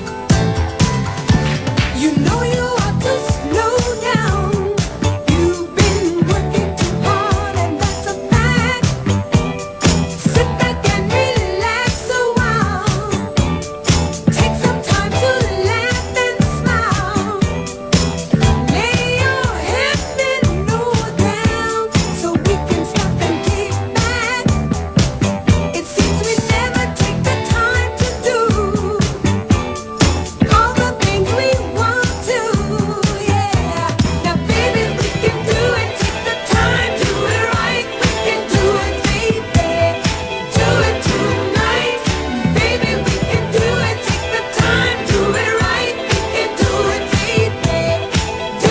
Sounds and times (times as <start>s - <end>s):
Disco: 0.0s - 48.7s.